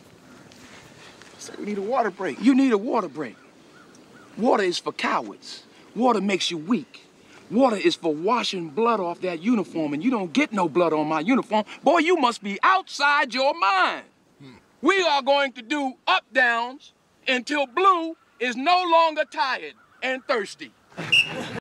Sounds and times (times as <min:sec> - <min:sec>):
Speech: 0:01.4 - 0:03.4, 0:04.4 - 0:20.7.